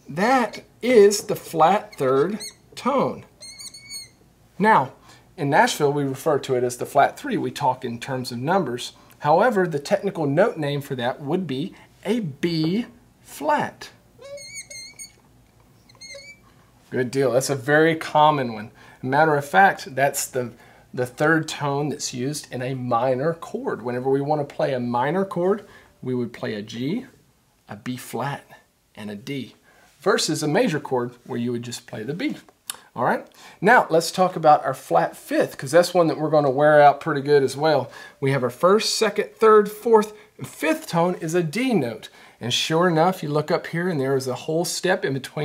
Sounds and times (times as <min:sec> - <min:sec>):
Speech: 0:00.0 - 0:03.3, 0:04.6 - 0:14.0, 0:16.9 - 0:45.4.